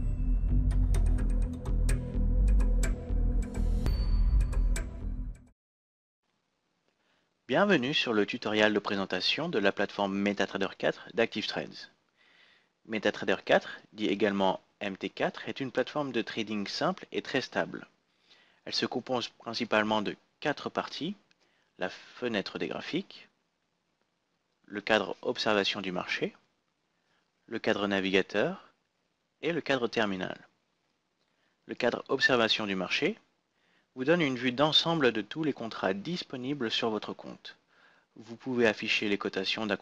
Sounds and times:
Speech: 0:07.5 - 0:12.0, 0:12.9 - 0:17.9, 0:18.6 - 0:21.2, 0:21.8 - 0:23.3, 0:24.7 - 0:26.4, 0:27.5 - 0:28.8, 0:29.4 - 0:30.5, 0:31.7 - 0:33.3, 0:34.0 - 0:37.6, 0:38.2 - 0:39.8.

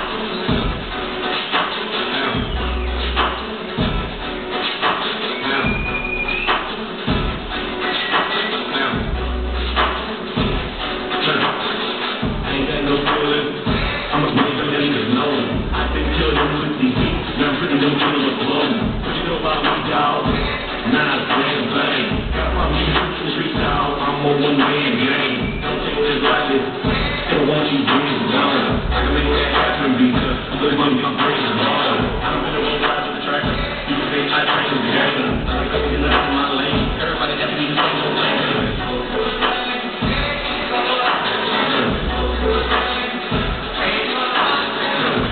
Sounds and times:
Inside, large room or hall: 0:00.0 - 0:45.3
Music: 0:00.0 - 0:45.3.

